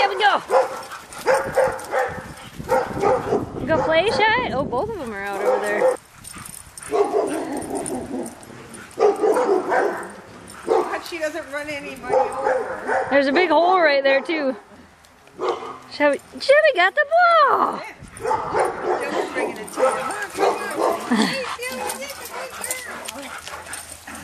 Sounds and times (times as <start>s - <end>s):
Bark: 0.5s - 4.2s, 5.4s - 6.0s, 6.9s - 8.2s, 9.0s - 11.0s, 12.1s - 13.2s, 15.4s - 15.8s, 18.2s - 21.1s.